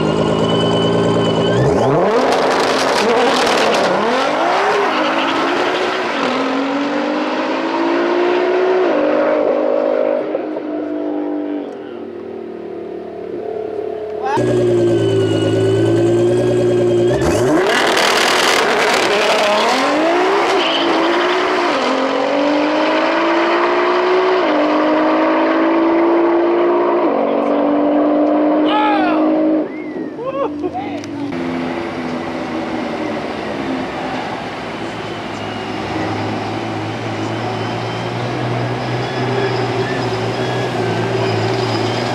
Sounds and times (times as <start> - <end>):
Outside, rural or natural: 0.0 - 42.1
Race car, auto racing: 0.0 - 42.1.